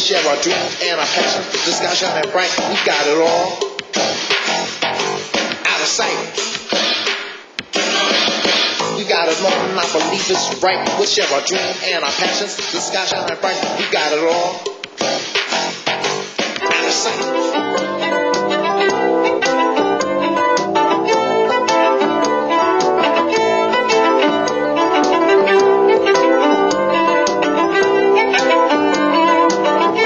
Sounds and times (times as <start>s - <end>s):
Music: 0.0s - 30.0s.